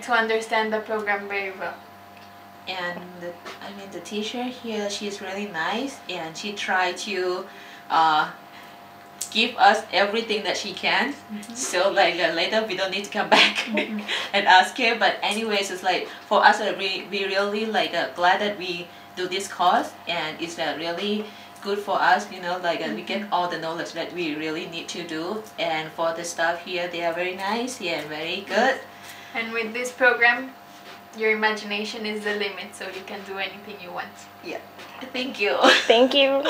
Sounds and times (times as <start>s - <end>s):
Female speech, woman speaking: 0.0s - 1.8s, 2.7s - 8.4s, 9.2s - 30.6s, 31.2s - 36.5s.